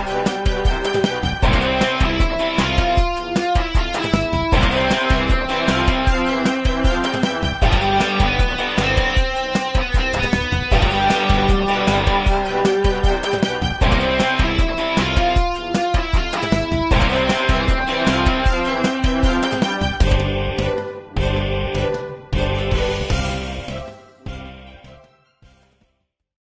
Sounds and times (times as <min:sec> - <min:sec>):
Music: 0:00.0 - 0:26.2.